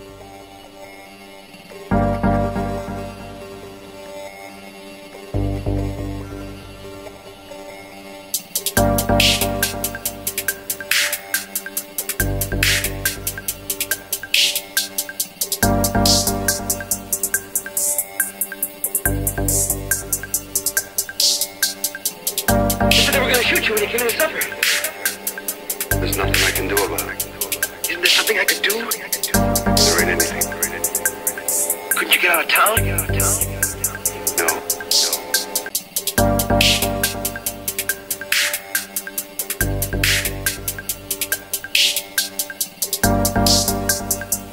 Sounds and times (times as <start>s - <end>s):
Music: 0.0s - 44.5s
Speech: 22.9s - 24.9s, 25.9s - 31.0s, 32.0s - 35.4s.